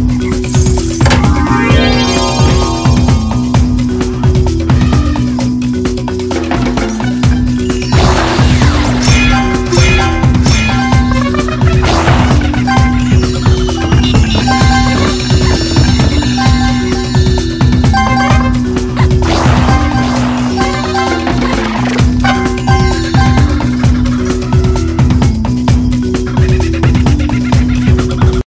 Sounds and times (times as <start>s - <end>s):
Music: 0.0s - 28.5s.